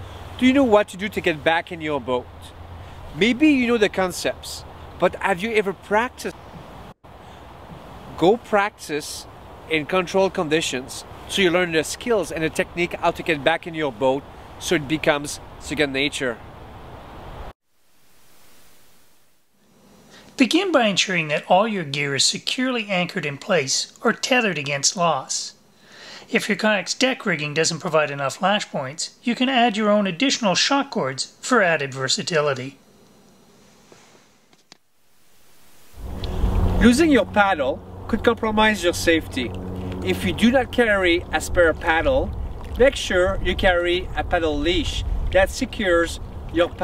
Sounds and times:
Speech: 0.4s - 2.5s, 3.2s - 6.4s, 8.2s - 16.4s, 20.4s - 25.6s, 26.3s - 32.8s, 36.8s - 46.8s.

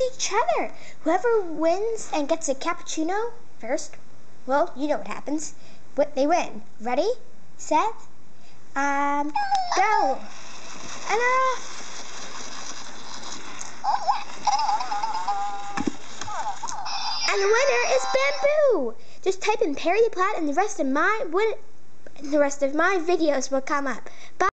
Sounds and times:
Speech: 0.0s - 8.0s, 8.8s - 10.3s, 11.1s - 11.6s, 17.3s - 21.6s, 22.2s - 24.5s.

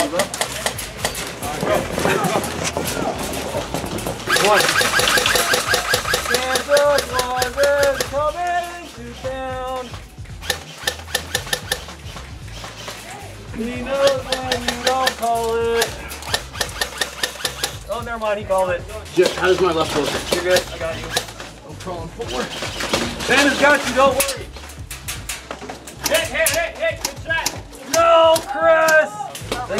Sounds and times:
Music: 0.0s - 29.7s
Outside, urban or manmade: 0.0s - 29.7s.

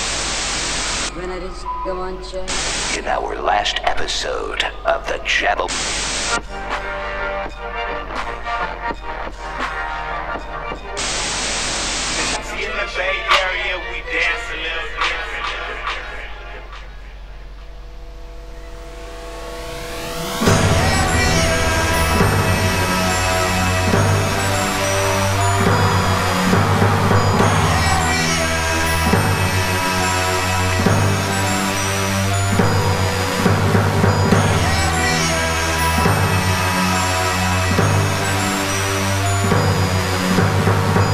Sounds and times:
Music: 1.0s - 41.1s
Singing: 12.2s - 17.4s, 20.4s - 32.6s, 34.3s - 39.4s.

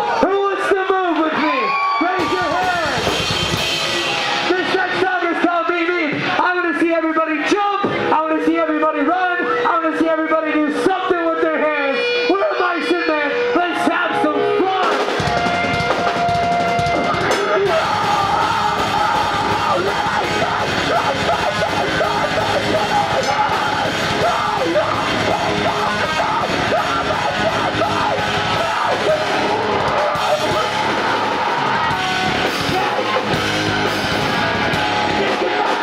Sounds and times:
Music: 1.9s - 35.8s.

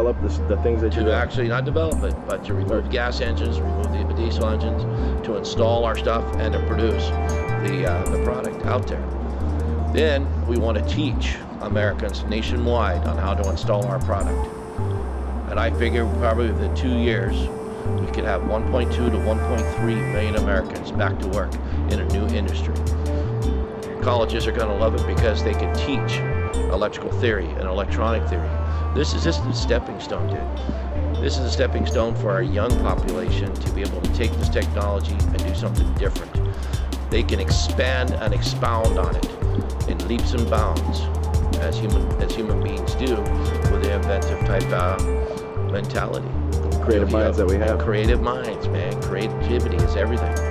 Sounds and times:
Speech: 0.0s - 9.1s, 9.9s - 14.5s, 15.5s - 22.9s, 24.0s - 50.5s
Music: 0.0s - 50.5s.

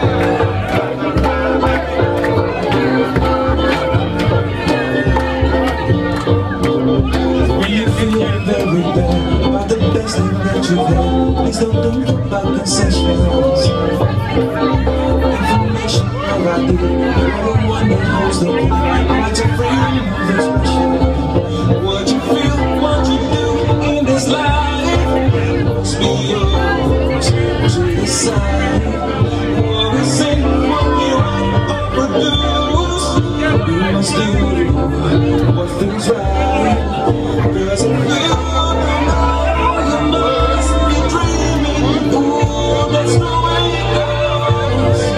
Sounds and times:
Music: 0.0s - 45.1s
Speech: 0.0s - 45.1s.

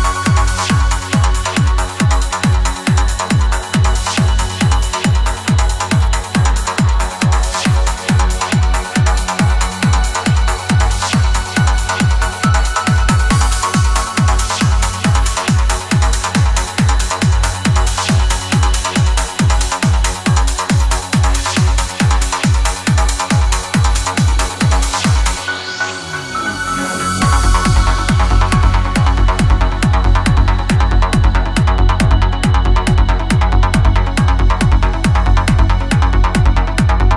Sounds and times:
Music: 0.0s - 37.1s.

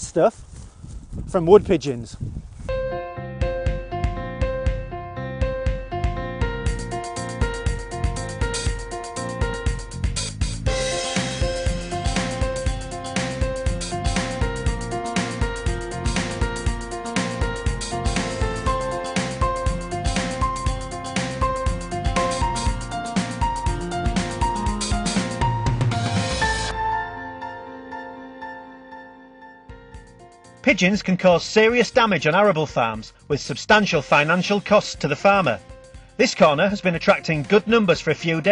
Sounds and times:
Speech: 0.0s - 0.4s, 1.3s - 2.2s, 30.6s - 35.6s, 36.2s - 38.5s
Music: 2.7s - 38.5s.

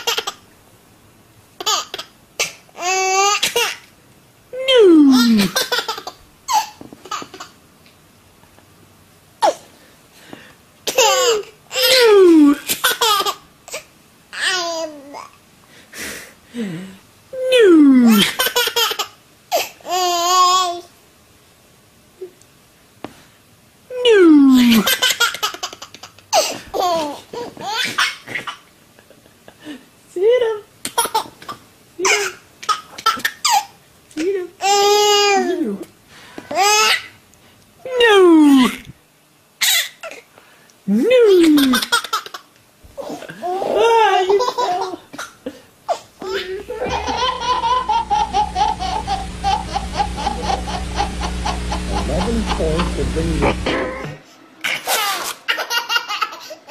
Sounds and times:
Speech: 4.6s - 5.5s, 17.4s - 18.3s, 23.9s - 24.9s, 30.1s - 30.7s, 35.3s - 35.9s, 37.9s - 38.9s, 40.9s - 41.8s, 43.6s - 44.6s, 46.2s - 47.2s, 52.0s - 54.2s.

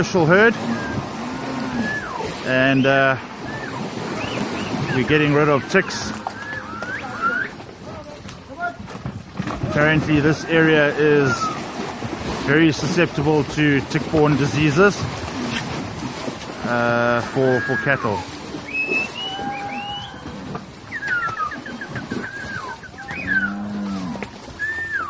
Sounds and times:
Speech: 2.4s - 3.2s, 4.9s - 6.2s, 9.6s - 11.6s, 12.5s - 15.0s, 16.6s - 18.2s.

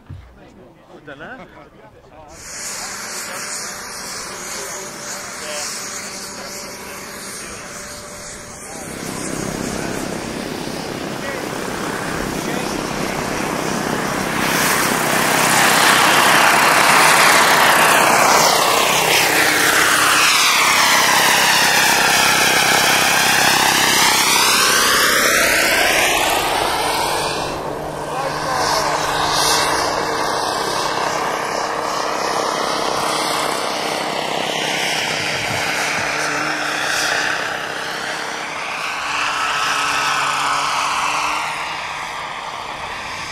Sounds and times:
Helicopter: 1.2s - 43.3s.

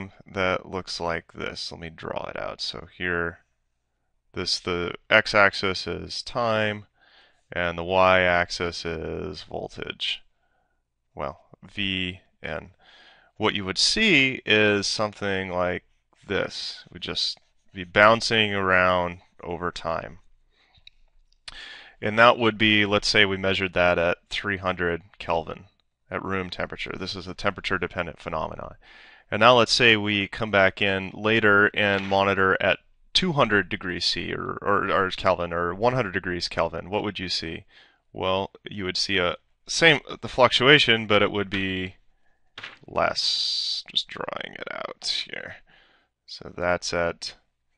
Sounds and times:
Speech: 0.0s - 3.4s, 4.4s - 6.9s, 7.5s - 10.3s, 11.2s - 12.8s, 13.4s - 20.2s, 21.5s - 42.0s, 42.6s - 45.7s, 46.3s - 47.5s.

